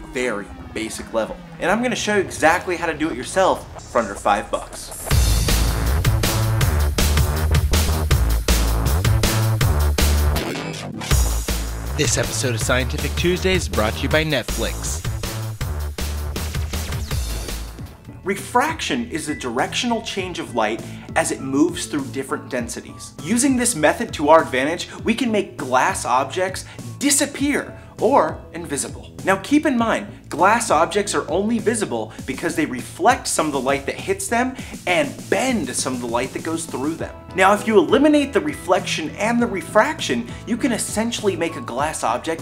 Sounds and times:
Music: 0.0s - 42.4s
Speech: 0.1s - 5.1s, 12.0s - 15.0s, 18.2s - 42.4s.

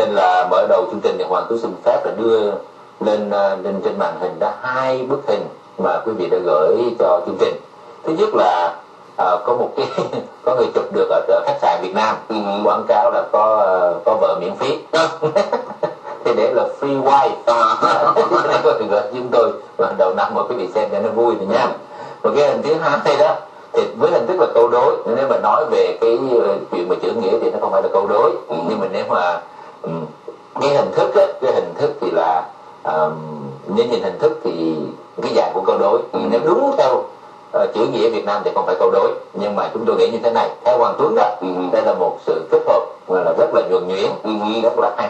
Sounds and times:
Speech: 0.0s - 45.1s.

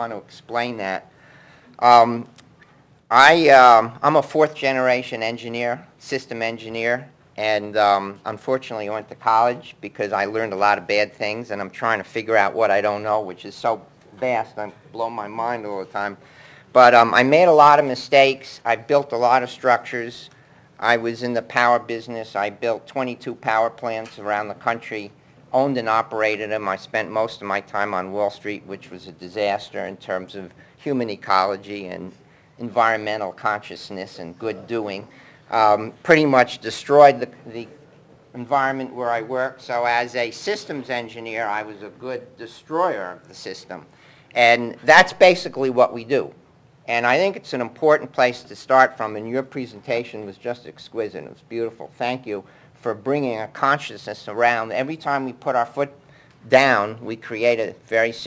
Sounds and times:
Speech: 0.0s - 1.1s, 1.8s - 2.4s, 3.1s - 58.2s.

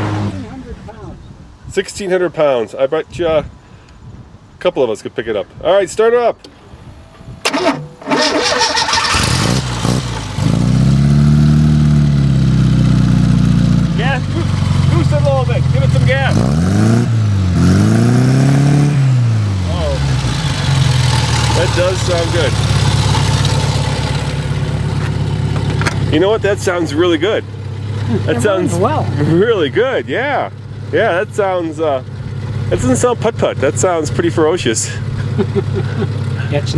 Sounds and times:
Car: 0.0s - 1.2s, 6.4s - 36.7s
Outside, rural or natural: 0.0s - 36.7s
Speech: 4.6s - 6.4s, 14.0s - 16.4s, 19.7s - 20.1s, 21.6s - 22.6s, 26.1s - 27.4s, 28.1s - 32.0s, 32.7s - 35.0s.

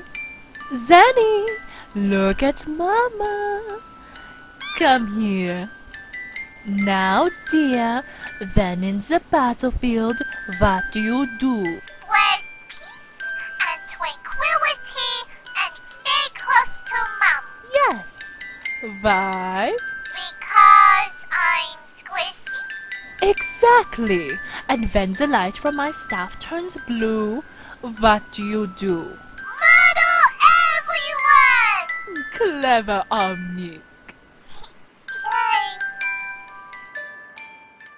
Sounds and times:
Music: 0.0s - 37.9s
Speech: 0.7s - 3.8s, 4.8s - 5.7s, 6.7s - 12.4s, 18.8s - 19.8s, 23.2s - 33.8s.

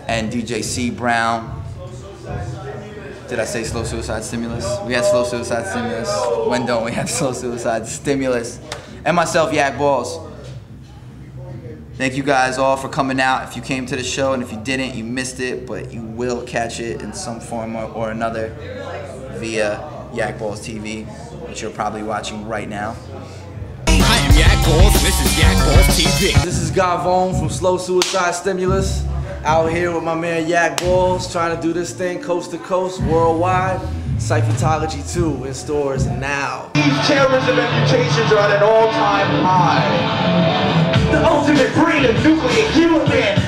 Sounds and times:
Speech: 0.0s - 10.6s, 11.3s - 40.0s.

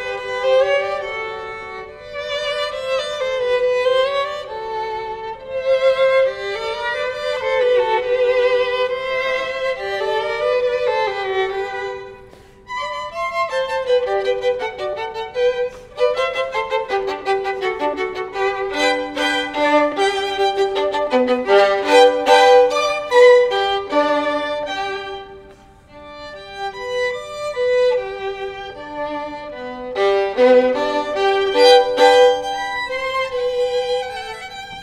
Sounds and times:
Violin, fiddle: 0.0s - 34.8s.

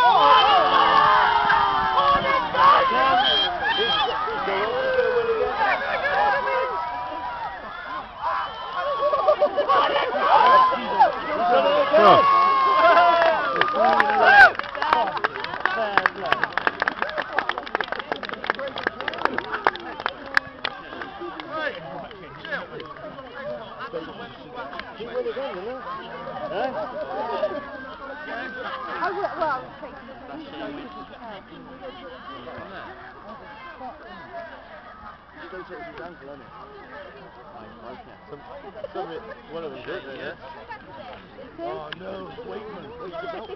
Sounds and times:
Speech: 9.5s - 43.5s.

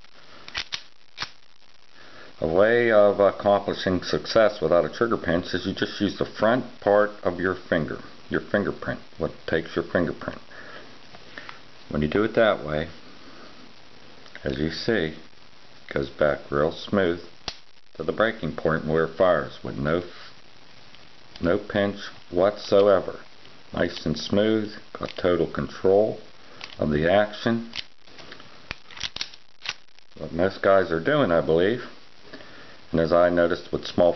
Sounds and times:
Inside, small room: 0.0s - 34.1s
Speech: 2.4s - 10.5s, 11.9s - 13.0s, 14.4s - 15.3s, 15.9s - 17.3s, 18.0s - 20.2s, 21.4s - 27.8s, 30.2s - 32.0s, 32.9s - 34.1s.

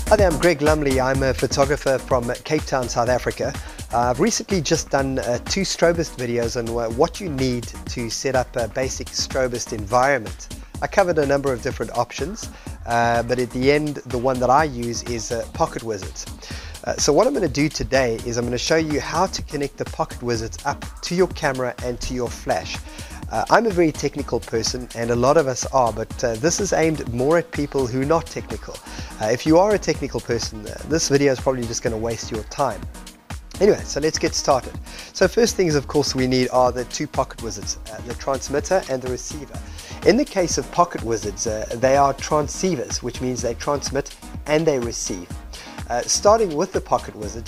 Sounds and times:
Music: 0.0s - 47.4s
Speech: 0.1s - 32.8s, 33.6s - 45.3s, 45.9s - 47.4s.

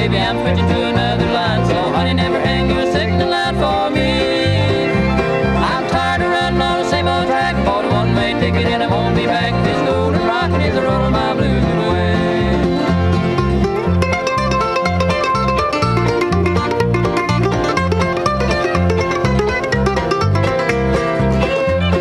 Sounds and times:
Singing: 0.0s - 4.9s, 5.6s - 12.9s
Country: 0.0s - 22.0s
Musical instrument: 0.0s - 22.0s
Song: 0.0s - 22.0s.

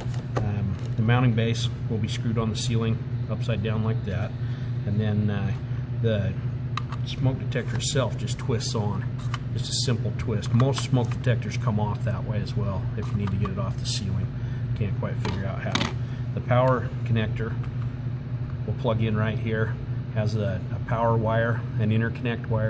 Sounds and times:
Speech: 0.4s - 6.4s, 7.0s - 17.6s, 18.6s - 22.6s.

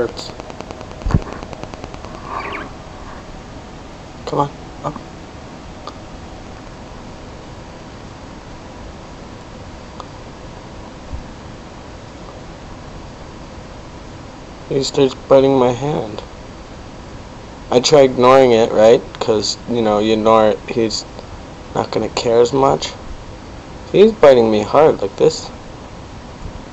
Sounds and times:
Speech: 4.2s - 5.0s, 14.7s - 16.3s, 17.7s - 21.2s, 21.8s - 23.0s, 23.9s - 25.6s.

